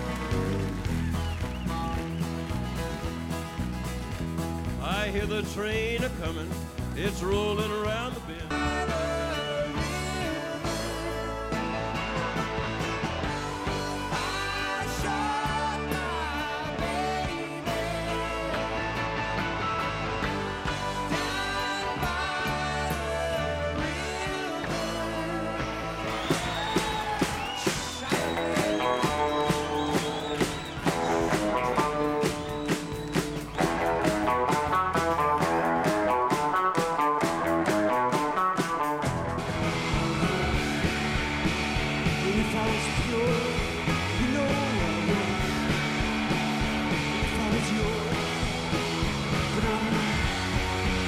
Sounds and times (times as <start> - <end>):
Rock and roll: 0.0 - 51.0.